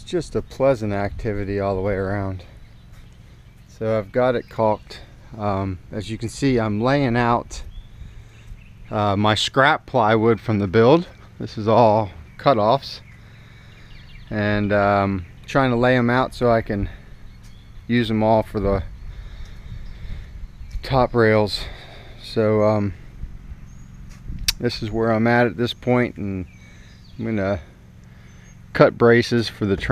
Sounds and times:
Speech: 0.0 - 2.5, 3.8 - 7.7, 8.9 - 13.0, 14.3 - 17.0, 17.9 - 18.9, 20.8 - 23.0, 24.5 - 26.5, 27.2 - 27.7, 28.7 - 29.9.

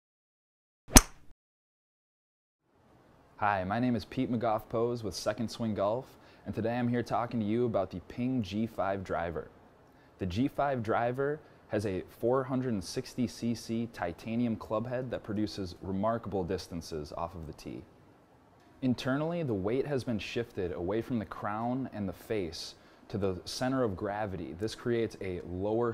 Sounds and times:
Speech: 3.4 - 9.5, 10.2 - 17.9, 18.8 - 25.9.

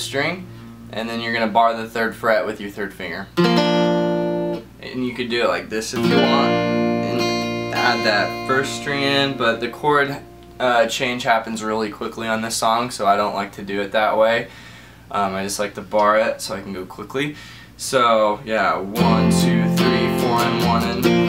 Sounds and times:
Speech: 0.0 - 3.4, 4.8 - 14.5, 15.1 - 21.0
Guitar: 0.0 - 14.0, 18.4 - 21.2.

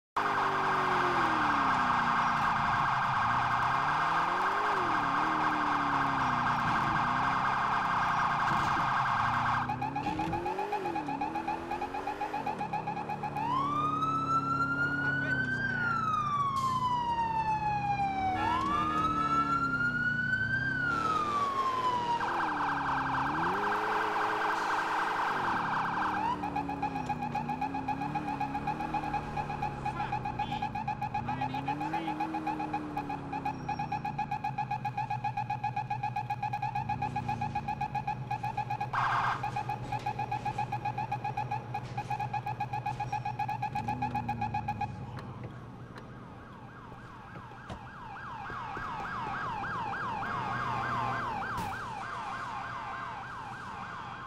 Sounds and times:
Car: 0.1 - 54.2.

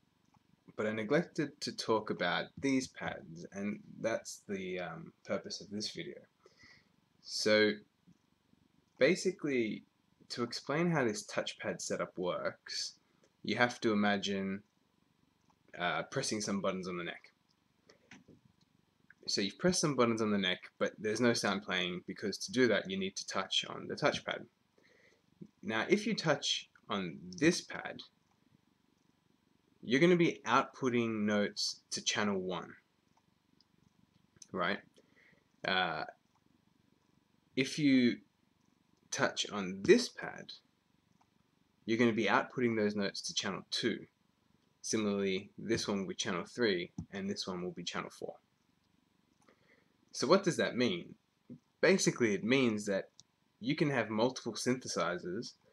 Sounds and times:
Speech: 0.8 - 6.2, 7.3 - 7.8, 9.0 - 12.9, 13.5 - 14.6, 15.8 - 17.3, 19.3 - 24.4, 25.5 - 28.0, 29.9 - 32.8, 34.4 - 34.8, 35.7 - 36.1, 37.6 - 38.2, 39.2 - 40.6, 41.9 - 44.1, 44.8 - 48.4, 50.2 - 51.2, 51.8 - 55.6.

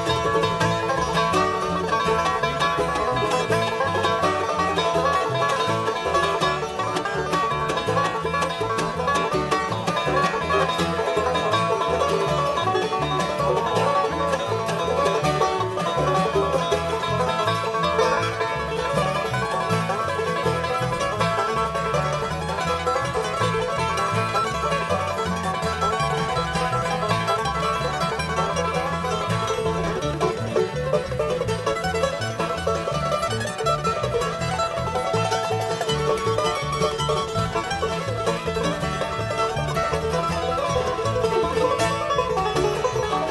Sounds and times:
Banjo: 0.0 - 43.3
Bluegrass: 0.0 - 43.3.

